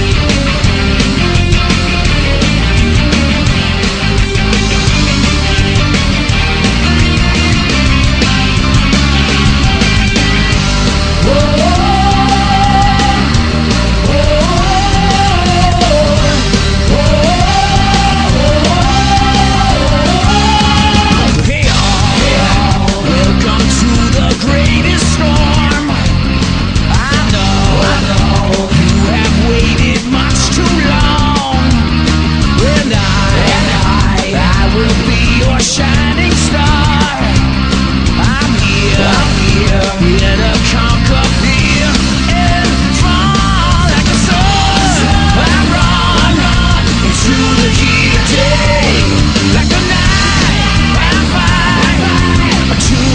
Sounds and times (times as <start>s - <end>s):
Music: 0.0s - 53.1s.